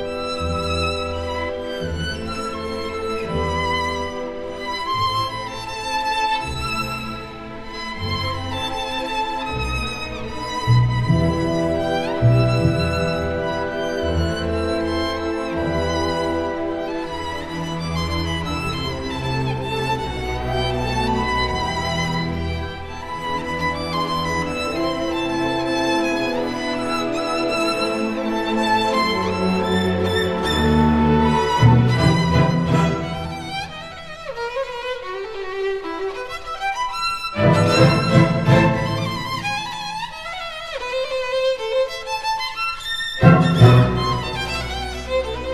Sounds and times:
Violin, fiddle: 0:00.0 - 0:45.5.

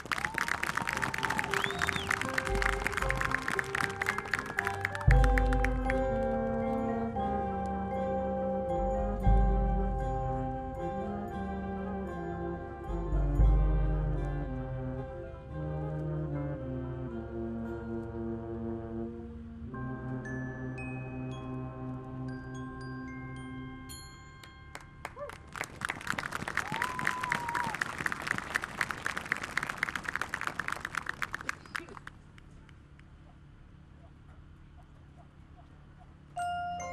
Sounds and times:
Outside, urban or manmade: 0:00.0 - 0:36.9
Music: 0:00.3 - 0:25.7, 0:36.4 - 0:36.9.

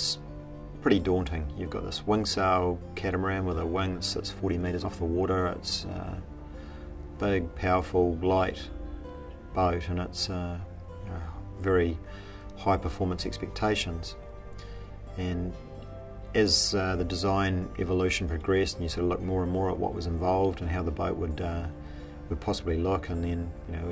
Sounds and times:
Speech: 0:00.0 - 0:00.2, 0:00.8 - 0:06.2, 0:07.2 - 0:08.7, 0:09.6 - 0:12.0, 0:12.6 - 0:14.2, 0:15.2 - 0:15.6, 0:16.4 - 0:21.7, 0:22.3 - 0:23.9
Music: 0:00.0 - 0:23.9.

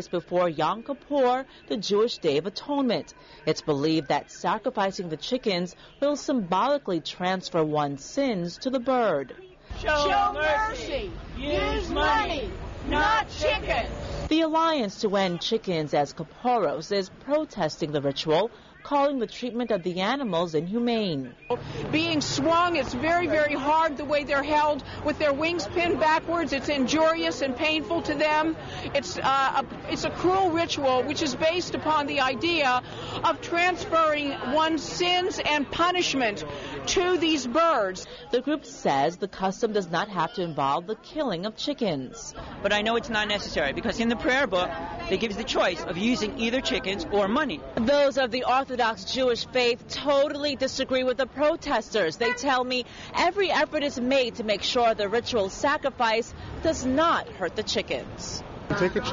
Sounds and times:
Speech: 0:00.0 - 0:59.1.

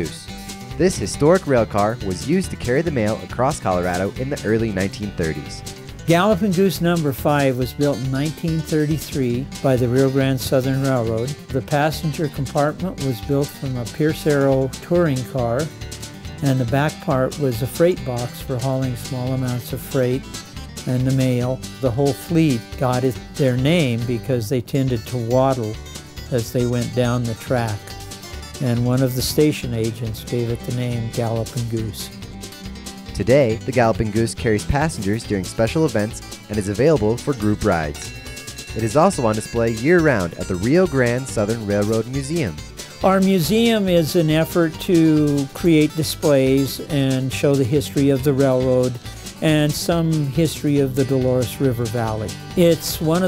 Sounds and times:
Speech: 0:00.0 - 0:15.7, 0:16.4 - 0:28.0, 0:28.6 - 0:32.2, 0:33.2 - 0:38.1, 0:38.7 - 0:53.2
Music: 0:00.0 - 0:53.2.

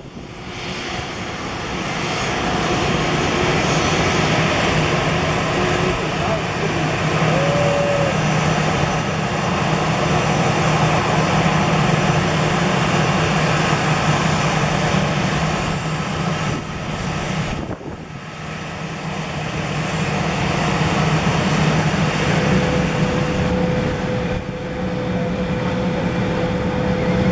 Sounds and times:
Aircraft engine: 0:00.0 - 0:27.3
Fixed-wing aircraft, airplane: 0:00.0 - 0:27.3.

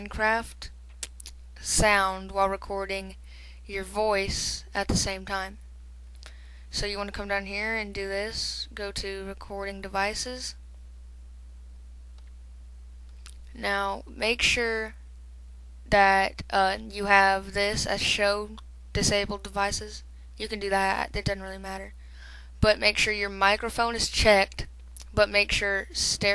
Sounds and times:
Speech: 0:00.0 - 0:00.7, 0:01.6 - 0:05.6, 0:06.7 - 0:10.6, 0:13.5 - 0:15.0, 0:15.9 - 0:22.0, 0:22.6 - 0:26.3.

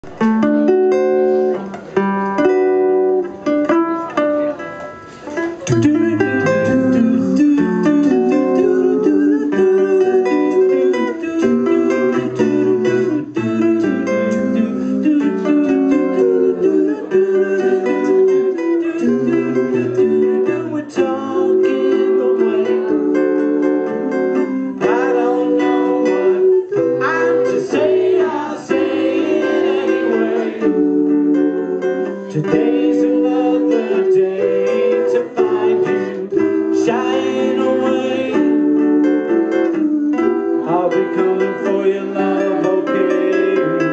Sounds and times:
Musical instrument: 0:00.1 - 0:43.9
Singing: 0:05.5 - 0:43.9.

